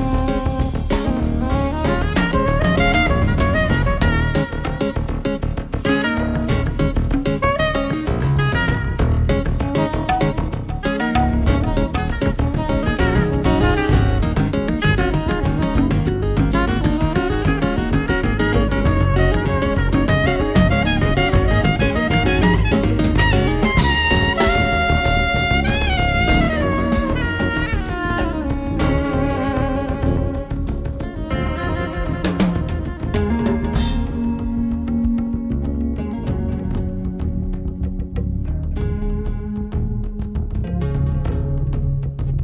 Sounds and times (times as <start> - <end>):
Drum: 0.0 - 42.4
Drum kit: 0.0 - 42.4
Guitar: 0.0 - 42.4.